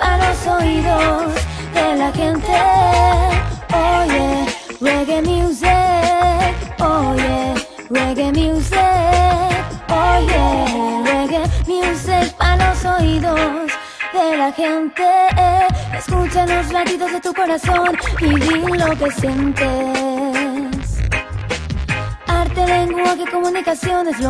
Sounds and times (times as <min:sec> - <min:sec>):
Independent music: 0:00.0 - 0:24.3.